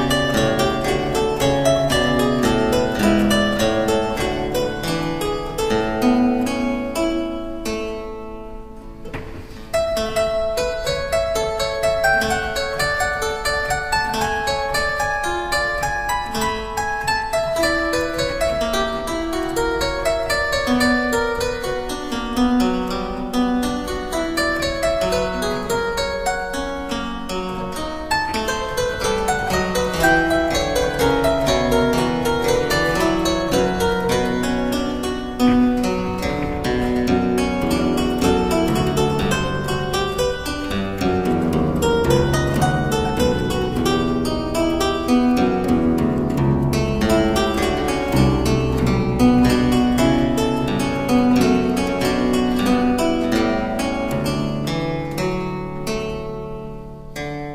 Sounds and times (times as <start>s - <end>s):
Piano: 0.0s - 56.8s.